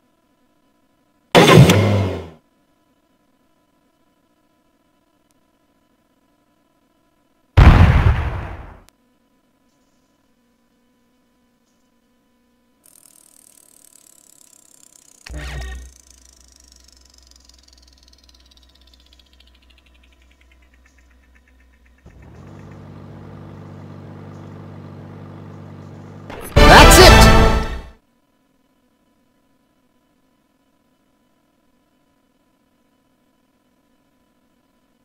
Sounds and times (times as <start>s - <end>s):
Speech: 26.5s - 27.4s.